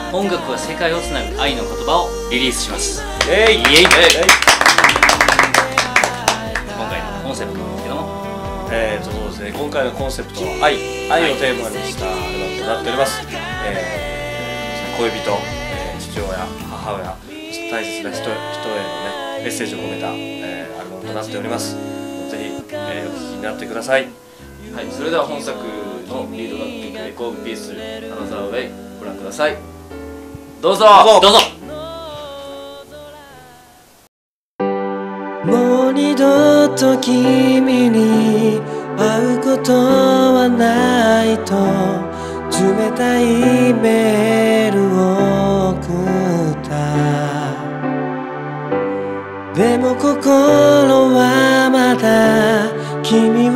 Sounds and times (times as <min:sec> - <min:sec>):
Music: 0:00.0 - 0:53.5
Speech: 0:00.1 - 0:04.4, 0:06.8 - 0:14.0, 0:15.0 - 0:29.6, 0:30.6 - 0:31.6.